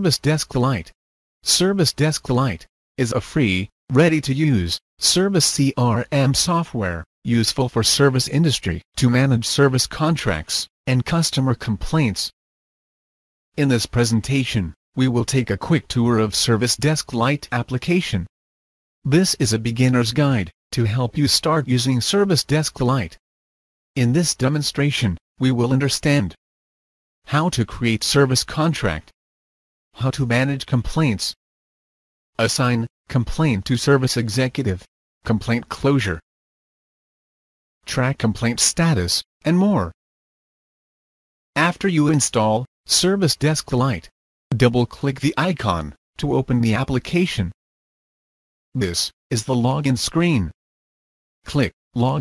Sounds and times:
Speech: 0:00.0 - 0:12.4, 0:13.6 - 0:18.3, 0:19.1 - 0:23.2, 0:24.0 - 0:26.4, 0:27.3 - 0:29.2, 0:30.0 - 0:31.4, 0:32.4 - 0:36.3, 0:37.8 - 0:40.0, 0:41.6 - 0:47.6, 0:48.8 - 0:50.6, 0:51.5 - 0:52.2.

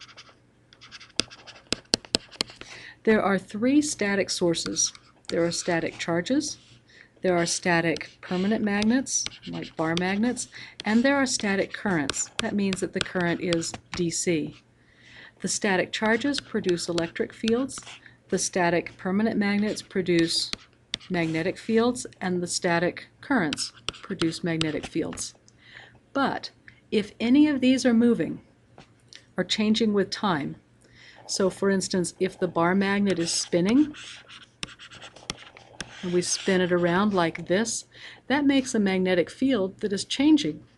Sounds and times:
Speech: 0:03.0 - 0:06.6, 0:07.2 - 0:14.6, 0:15.4 - 0:25.4, 0:26.2 - 0:28.4, 0:29.4 - 0:30.6, 0:31.3 - 0:34.1, 0:36.0 - 0:40.7.

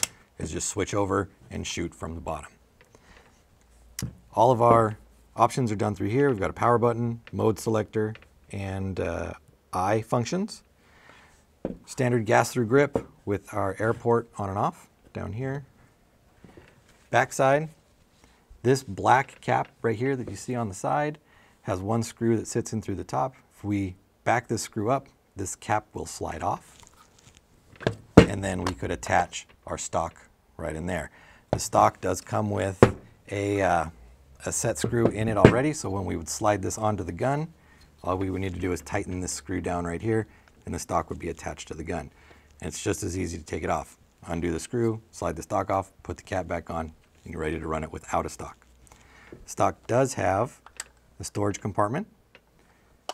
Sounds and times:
Inside, small room: 0:00.0 - 0:53.1
Speech: 0:00.4 - 0:02.6, 0:04.0 - 0:10.7, 0:11.9 - 0:15.7, 0:17.1 - 0:17.8, 0:18.6 - 0:26.7, 0:28.2 - 0:48.6, 0:49.5 - 0:50.6, 0:51.2 - 0:52.2.

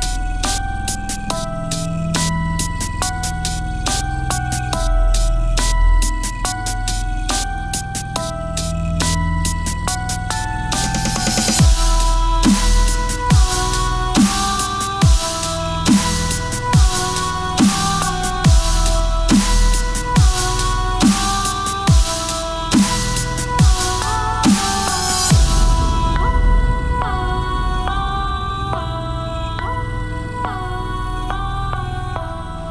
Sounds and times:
Dubstep: 0:00.0 - 0:31.4.

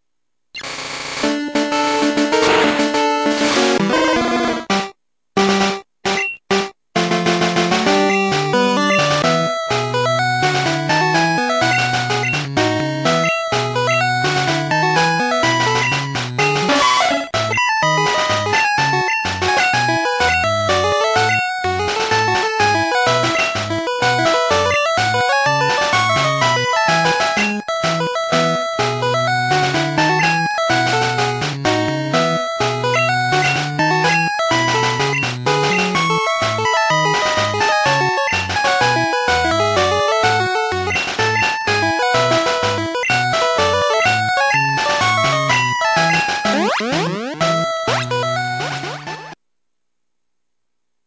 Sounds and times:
Music: 0:01.2 - 0:49.4.

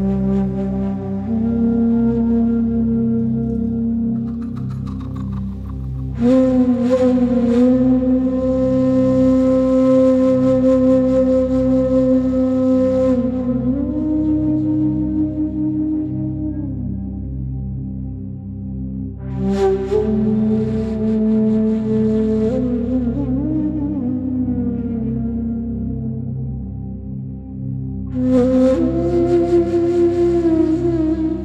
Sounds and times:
Music: 0:00.0 - 0:31.4.

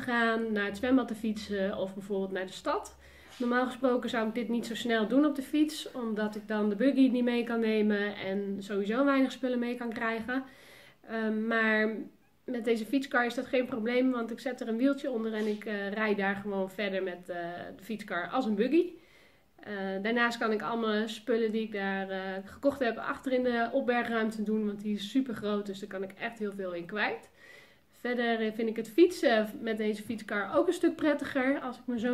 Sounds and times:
Speech: 0:00.0 - 0:10.5, 0:11.1 - 0:19.0, 0:19.6 - 0:27.3, 0:28.0 - 0:32.1.

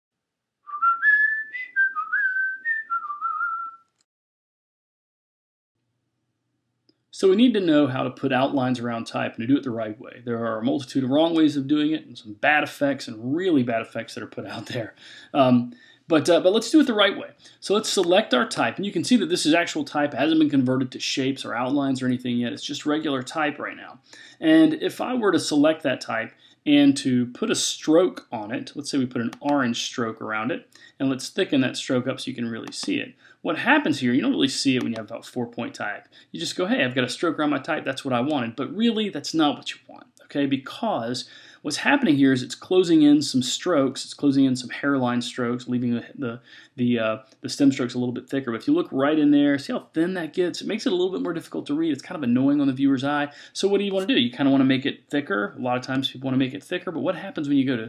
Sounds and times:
Whistling: 0:00.7 - 0:04.0
Inside, small room: 0:05.8 - 0:57.8
Speech: 0:07.2 - 0:57.8.

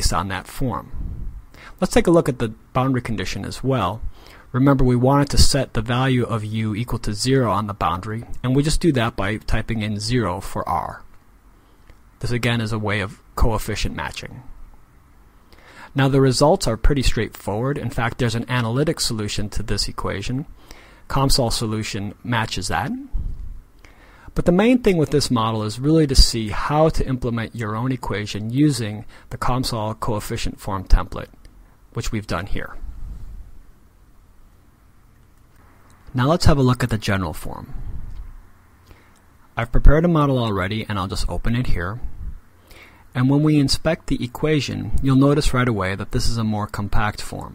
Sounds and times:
Speech: 0:00.0 - 0:01.0, 0:01.8 - 0:11.1, 0:12.2 - 0:14.5, 0:15.9 - 0:20.5, 0:21.1 - 0:23.2, 0:24.3 - 0:32.8, 0:36.1 - 0:37.8, 0:39.6 - 0:42.1, 0:43.1 - 0:47.5.

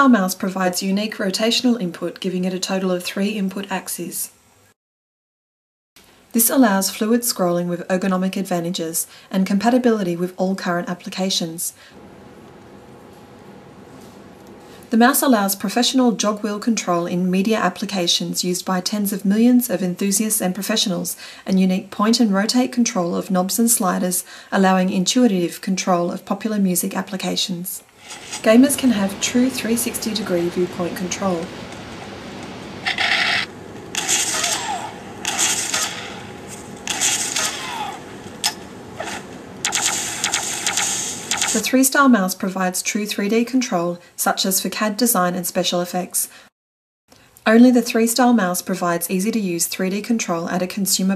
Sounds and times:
Speech: 0:00.0 - 0:04.4, 0:06.3 - 0:11.8, 0:14.9 - 0:27.8, 0:28.4 - 0:31.5, 0:41.5 - 0:46.4, 0:47.4 - 0:51.1.

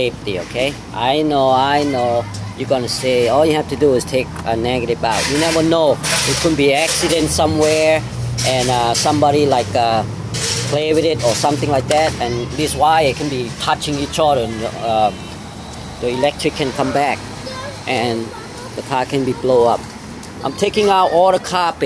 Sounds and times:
Speech: 0:00.0 - 0:10.1, 0:10.7 - 0:15.3, 0:16.0 - 0:17.2, 0:20.4 - 0:21.8.

